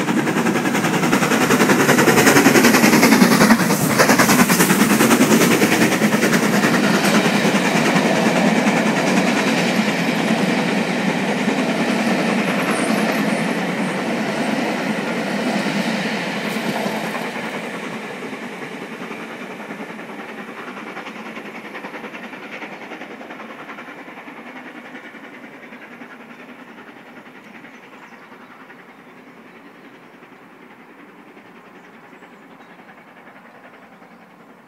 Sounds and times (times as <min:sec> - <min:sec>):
Railroad car, train wagon: 0:00.0 - 0:34.6
Train: 0:00.0 - 0:34.6.